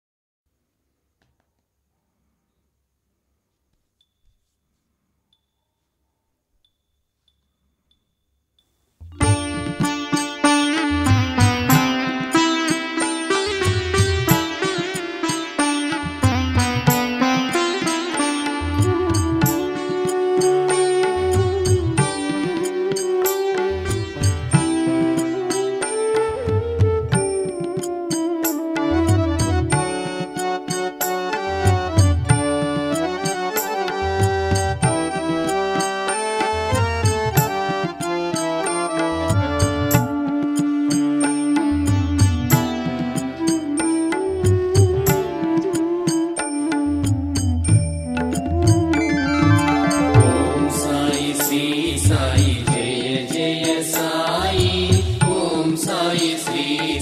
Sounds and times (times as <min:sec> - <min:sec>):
Music: 0:01.2 - 0:57.0.